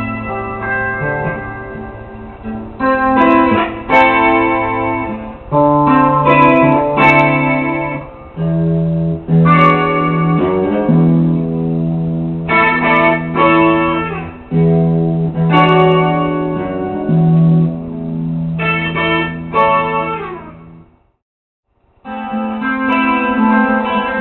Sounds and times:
Electric guitar: 0.0 - 21.0, 22.0 - 24.2.

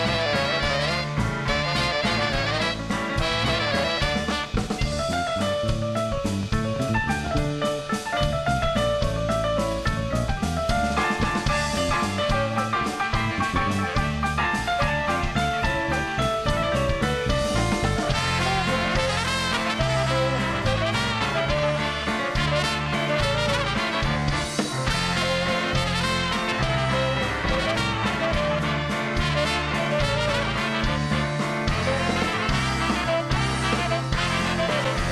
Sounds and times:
Music: 0.0 - 35.1.

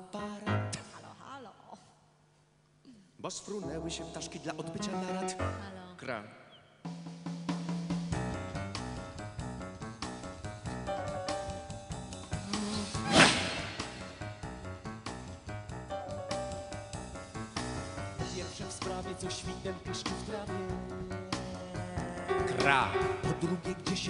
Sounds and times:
Music: 0.0 - 1.1, 3.5 - 6.2, 6.8 - 24.1.

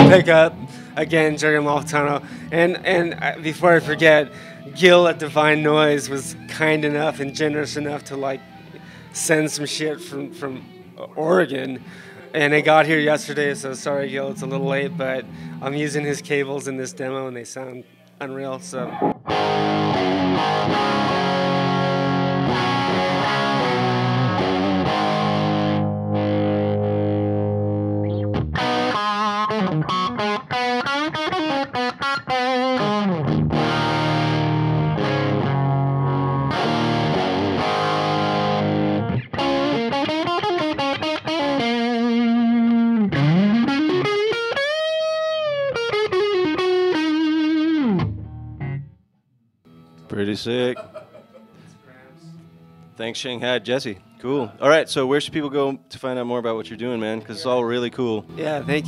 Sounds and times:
Speech: 0.0 - 8.4, 9.2 - 18.9, 50.1 - 50.8, 53.0 - 58.8
Guitar: 0.0 - 58.8.

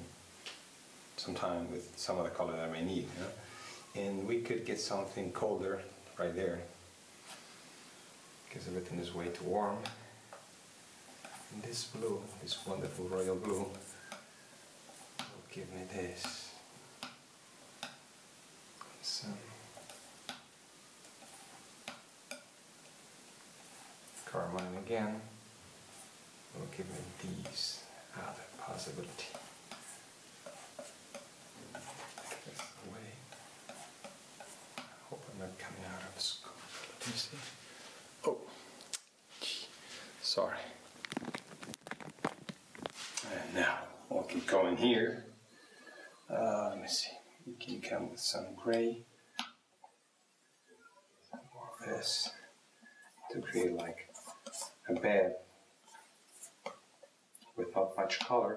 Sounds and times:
Speech: 1.2 - 6.8, 8.5 - 10.0, 11.5 - 13.9, 15.3 - 16.6, 19.0 - 19.6, 24.2 - 25.4, 26.6 - 29.4, 35.1 - 37.6, 39.4 - 40.8, 43.2 - 45.3, 46.3 - 49.1, 51.5 - 52.5, 53.3 - 54.2, 54.8 - 55.5, 57.6 - 58.5.

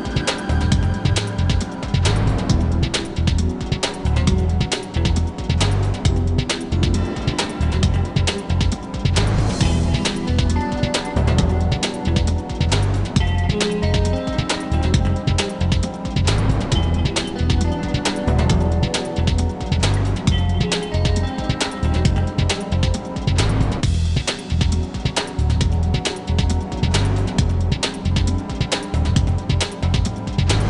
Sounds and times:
Music: 0.0 - 30.6.

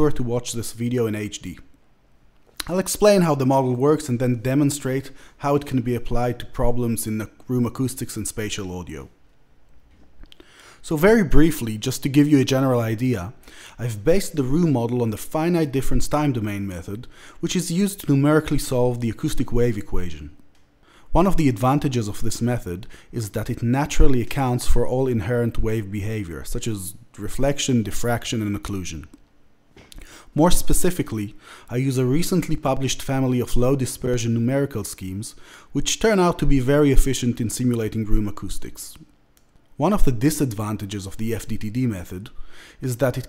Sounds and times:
Speech: 0.0 - 1.7, 2.6 - 9.2, 10.8 - 20.4, 21.1 - 29.2, 30.4 - 39.1, 39.8 - 43.2.

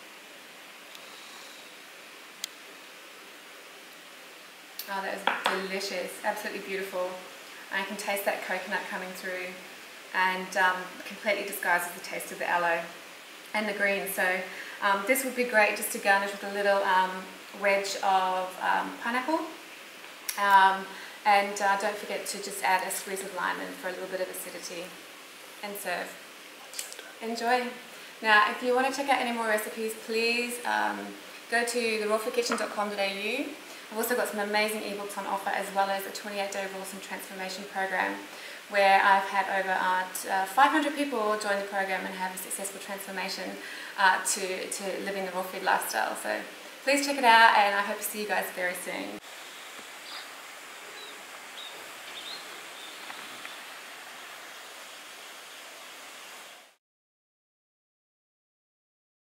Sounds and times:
Speech: 4.8 - 9.6, 10.2 - 19.6, 20.3 - 25.0, 25.6 - 26.2, 27.2 - 49.2
Outside, rural or natural: 46.6 - 56.8.

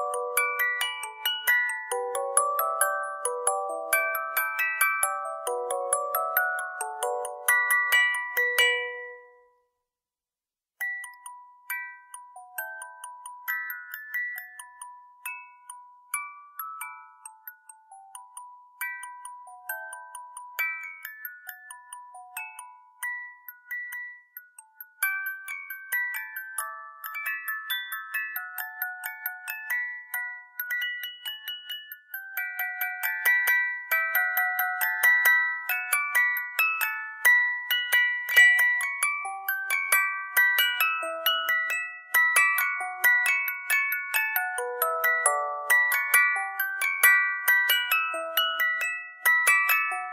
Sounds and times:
Music: 0.0 - 9.9, 10.8 - 50.1.

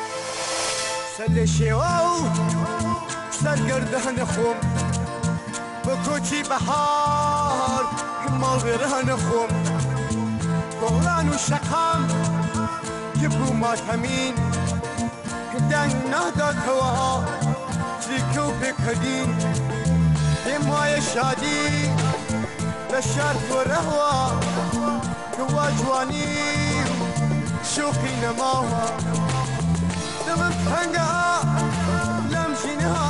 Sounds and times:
Acoustic guitar: 0.0 - 33.0.

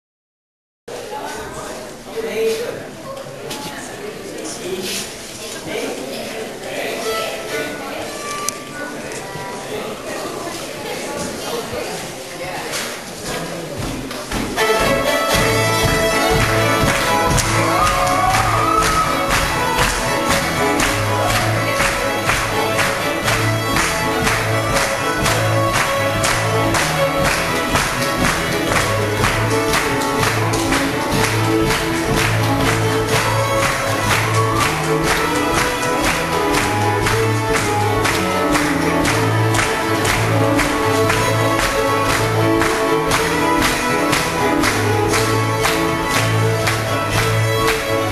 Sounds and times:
Violin, fiddle: 6.9 - 8.9, 14.6 - 48.1.

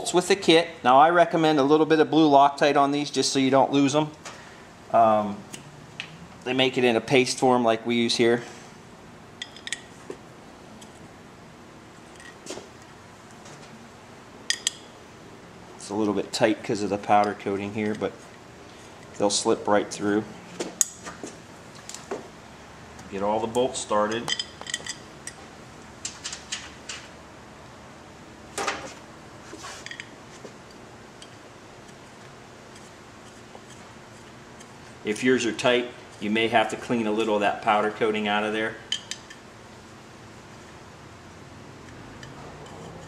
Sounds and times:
Speech: 0.0 - 4.2, 4.9 - 5.5, 6.4 - 8.5, 15.8 - 18.2, 19.2 - 20.3, 23.1 - 24.3, 35.0 - 38.8.

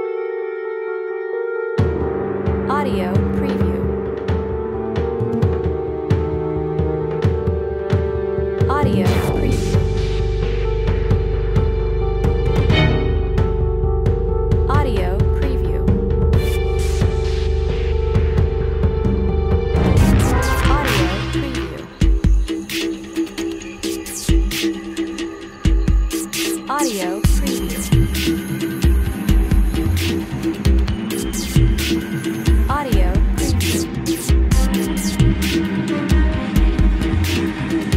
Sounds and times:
Scary music: 0.0 - 37.9
Speech: 2.7 - 4.0, 8.7 - 9.8, 14.7 - 17.0, 20.2 - 21.9, 26.6 - 28.1, 32.7 - 33.8.

